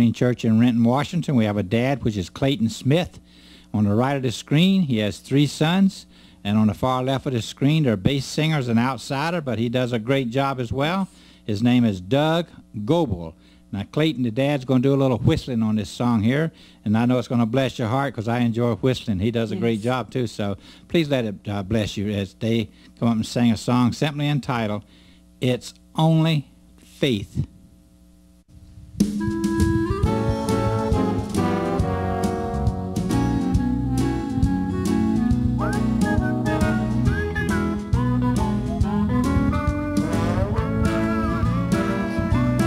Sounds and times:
Speech: 0:00.0 - 0:03.2, 0:03.8 - 0:27.5.

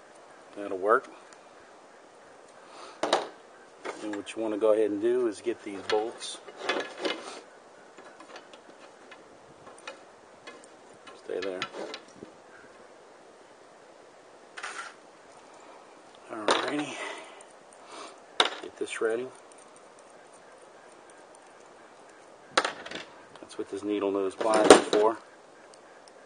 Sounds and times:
Speech: 0:00.6 - 0:01.2, 0:04.0 - 0:06.4, 0:11.2 - 0:11.7, 0:16.3 - 0:17.2, 0:18.6 - 0:19.4, 0:23.4 - 0:25.2.

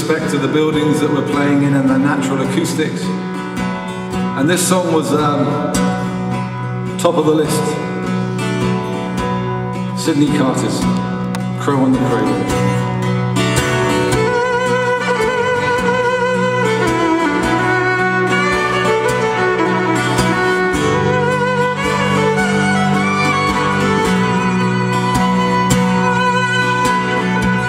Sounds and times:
Music: 0:00.0 - 0:27.6.

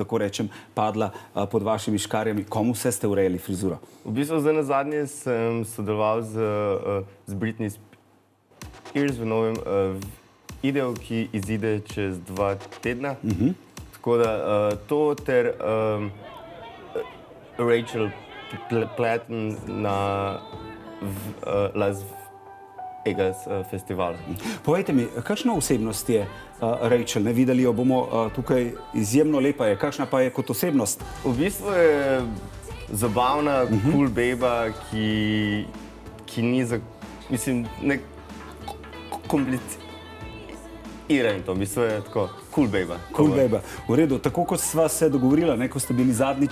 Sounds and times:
Speech: 0:00.0 - 0:07.8, 0:09.0 - 0:20.4, 0:23.1 - 0:35.7, 0:36.3 - 0:38.0, 0:39.3 - 0:39.8, 0:41.1 - 0:46.5
Music: 0:08.5 - 0:46.5.

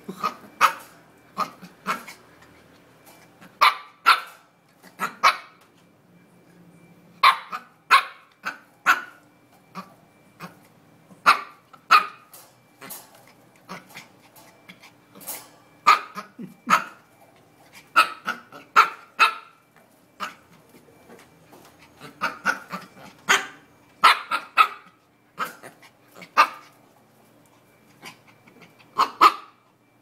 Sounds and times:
Bow-wow: 0:00.1 - 0:02.2, 0:03.5 - 0:05.6, 0:07.2 - 0:10.6, 0:11.2 - 0:12.2, 0:15.8 - 0:17.0, 0:18.0 - 0:19.6, 0:20.2 - 0:20.5, 0:22.0 - 0:26.7, 0:28.0 - 0:29.6
Bark: 0:00.2 - 0:02.2, 0:03.6 - 0:05.6, 0:07.2 - 0:09.2, 0:11.2 - 0:12.3, 0:15.8 - 0:17.0, 0:18.0 - 0:19.6, 0:20.2 - 0:20.5, 0:22.0 - 0:26.7, 0:29.0 - 0:29.6.

